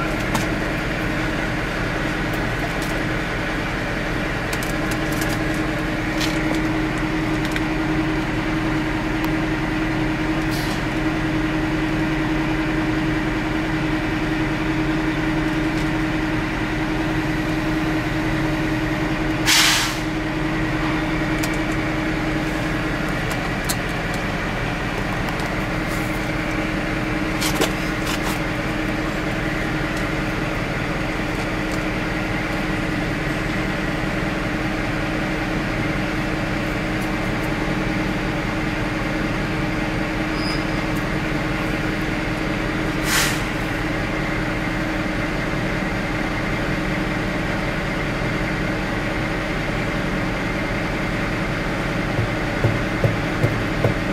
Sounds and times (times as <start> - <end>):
Hiss: 19.5 - 20.1, 43.0 - 43.6.